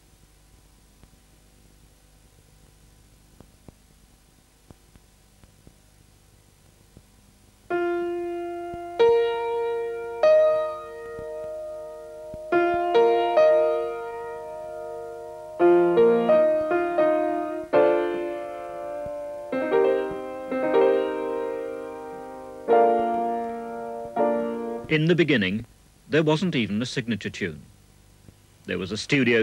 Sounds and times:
Music: 7.7 - 24.9
Speech: 24.9 - 27.7, 28.7 - 29.4.

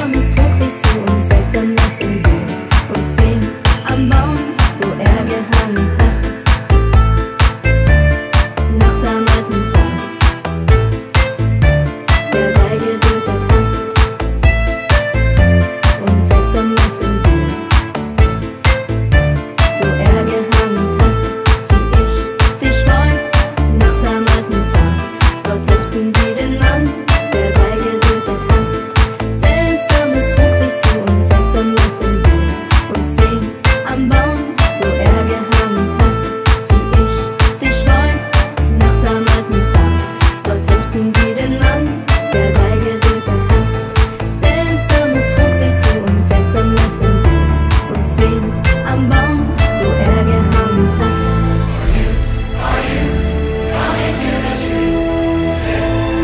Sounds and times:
Independent music: 0.0 - 56.2.

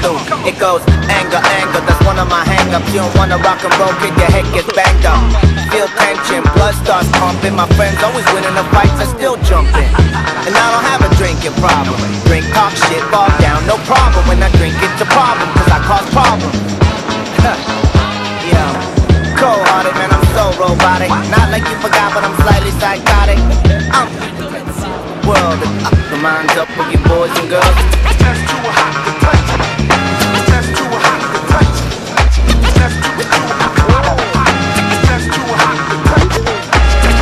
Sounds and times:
Music: 0.0 - 37.2.

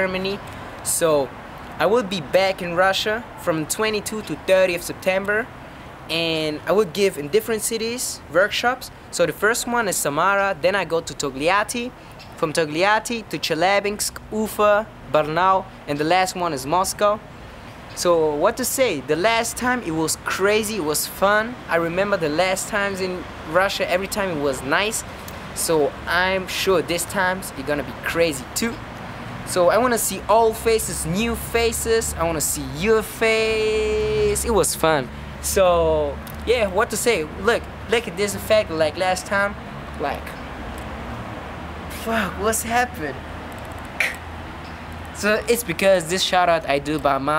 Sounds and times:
Speech: 0.0 - 5.5, 6.1 - 17.2, 18.0 - 25.0, 25.6 - 28.8, 29.5 - 40.4, 41.9 - 43.2, 45.2 - 47.3.

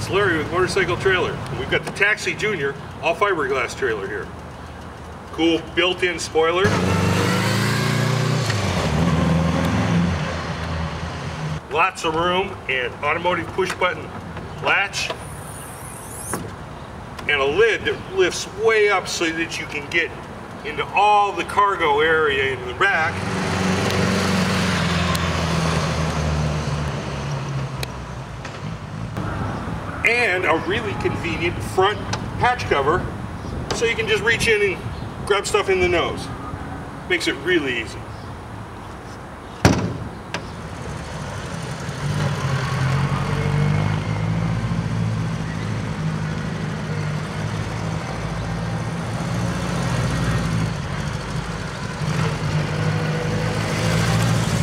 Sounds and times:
Speech: 0.0 - 4.3, 5.4 - 6.7, 11.7 - 15.2, 17.3 - 23.2, 30.1 - 33.1, 33.7 - 36.4, 37.1 - 38.0
Motorcycle: 6.6 - 11.6, 22.9 - 29.6, 40.4 - 54.6.

